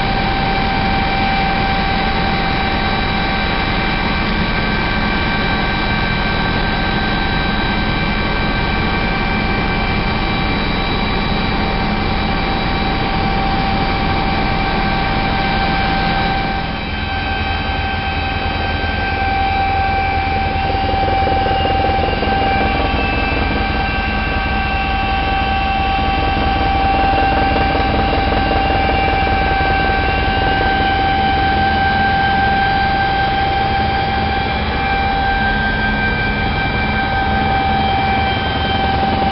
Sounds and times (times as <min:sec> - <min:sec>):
Helicopter: 0:00.0 - 0:39.3.